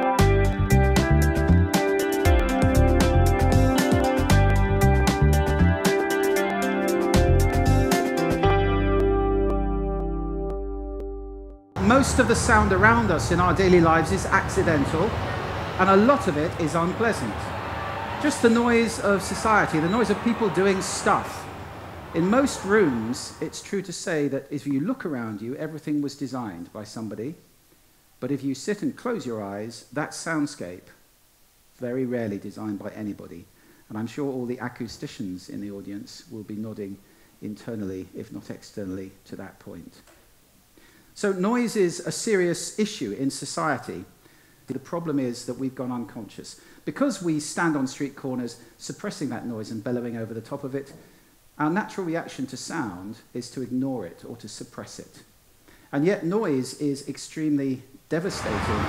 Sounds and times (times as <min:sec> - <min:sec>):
Speech: 0:11.8 - 0:17.6, 0:18.2 - 0:27.4, 0:28.2 - 0:31.0, 0:31.8 - 0:40.1, 0:41.2 - 0:44.1, 0:44.7 - 0:51.0, 0:51.6 - 0:55.3, 0:55.9 - 0:58.8.